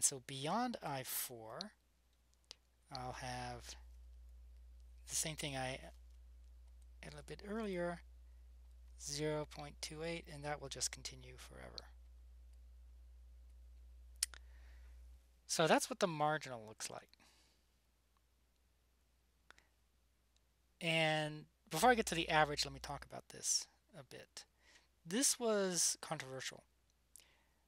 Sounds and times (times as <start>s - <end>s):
Speech: 0.0s - 1.8s, 2.9s - 3.8s, 5.1s - 6.0s, 7.0s - 8.0s, 9.0s - 11.9s, 15.5s - 17.1s, 20.8s - 24.5s, 25.1s - 26.6s.